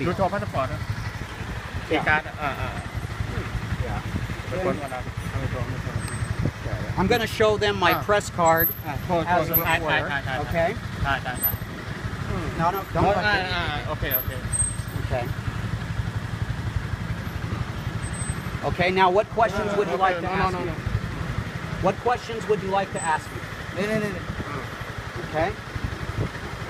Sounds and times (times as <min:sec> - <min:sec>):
Car: 0:00.0 - 0:26.6
Outside, urban or manmade: 0:00.0 - 0:26.6
Speech: 0:01.9 - 0:06.0, 0:06.6 - 0:11.4, 0:21.8 - 0:24.6.